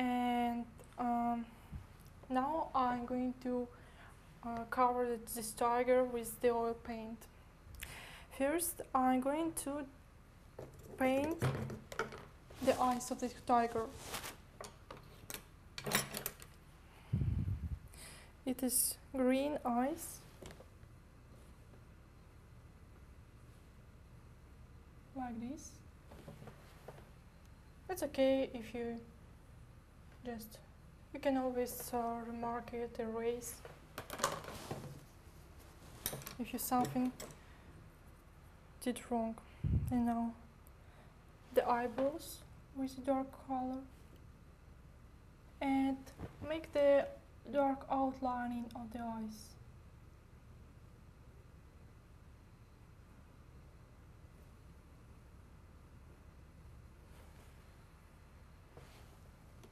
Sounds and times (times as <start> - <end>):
Female speech, woman speaking: 0.0 - 1.5, 2.3 - 3.7, 4.4 - 7.3, 8.4 - 10.0, 11.0 - 11.5, 12.6 - 14.0, 18.5 - 20.3, 25.2 - 25.8, 27.9 - 29.1, 30.2 - 33.7, 36.4 - 37.2, 38.8 - 40.5, 41.5 - 43.9, 45.6 - 49.6.